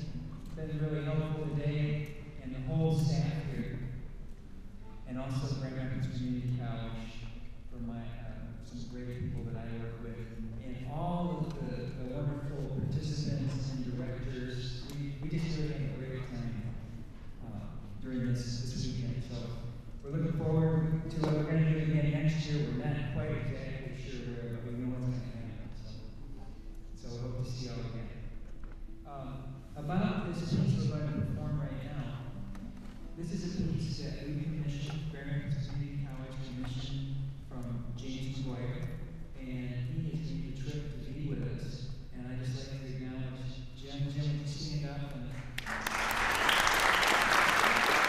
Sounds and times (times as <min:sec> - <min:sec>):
Speech: 0:00.0 - 0:04.0, 0:05.0 - 0:16.8, 0:17.4 - 0:26.1, 0:26.9 - 0:28.4, 0:29.1 - 0:32.4, 0:33.2 - 0:45.6.